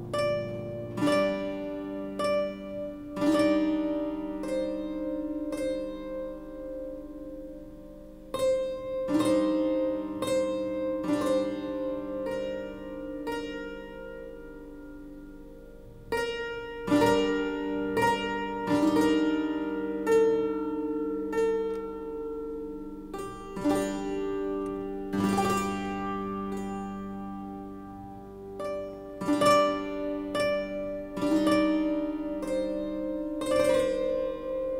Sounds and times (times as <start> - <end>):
Harp: 0.0 - 34.7.